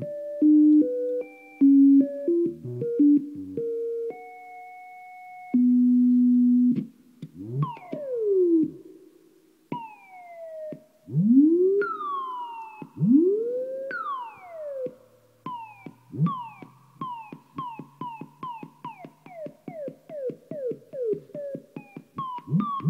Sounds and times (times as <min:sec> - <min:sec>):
Effects unit: 0:00.0 - 0:22.9.